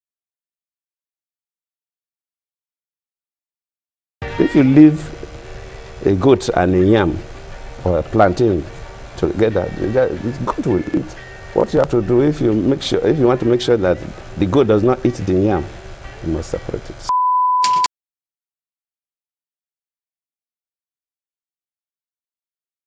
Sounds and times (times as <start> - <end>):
Music: 4.2 - 17.1
Speech: 4.4 - 5.2, 6.0 - 7.2, 7.8 - 17.1.